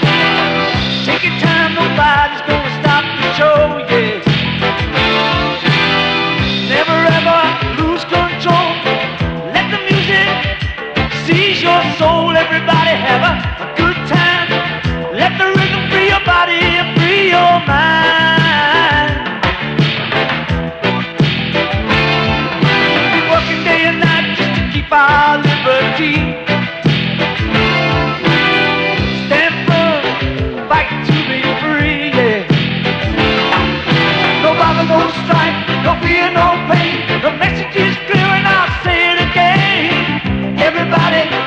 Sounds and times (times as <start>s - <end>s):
Music: 0.0s - 41.4s.